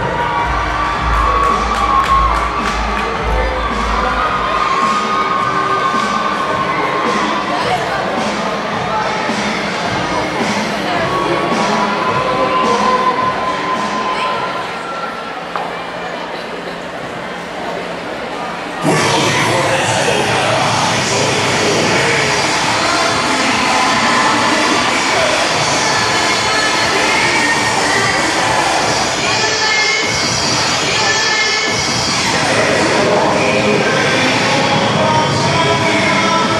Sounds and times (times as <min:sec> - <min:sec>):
Music: 0:00.0 - 0:14.7, 0:18.8 - 0:36.5
Inside, large room or hall: 0:00.0 - 0:36.5.